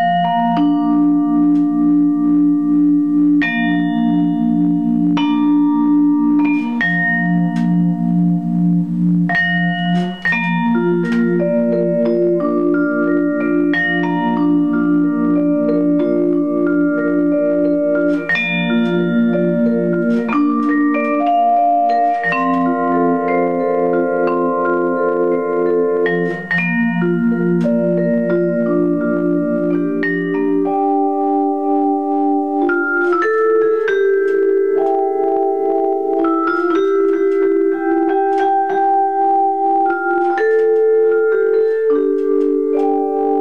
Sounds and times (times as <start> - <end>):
Marimba, xylophone: 0.0 - 43.4.